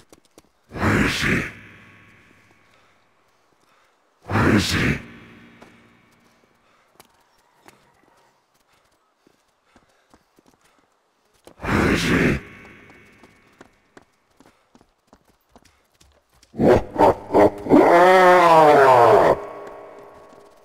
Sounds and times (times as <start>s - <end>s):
Outside, urban or manmade: 0.0s - 20.6s
Speech: 0.7s - 1.9s, 4.3s - 5.4s, 11.6s - 13.0s.